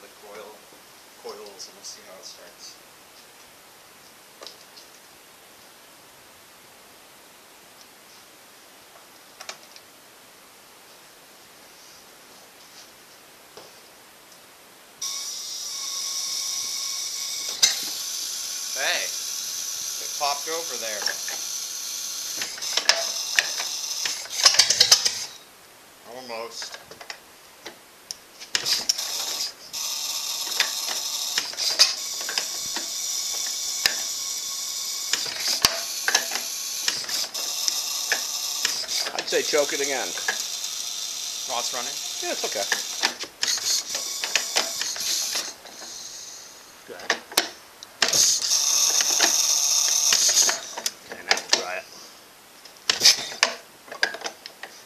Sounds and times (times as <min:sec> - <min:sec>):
Outside, urban or manmade: 0:00.0 - 0:54.8
Engine: 0:15.0 - 0:25.4, 0:28.6 - 0:51.6.